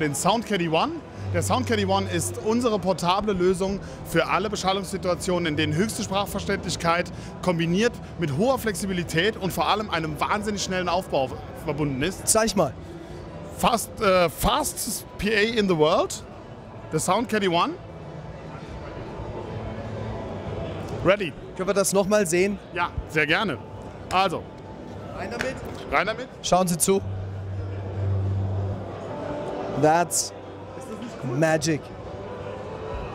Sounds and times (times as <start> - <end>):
Speech: 0.0 - 12.8
Music: 0.0 - 33.1.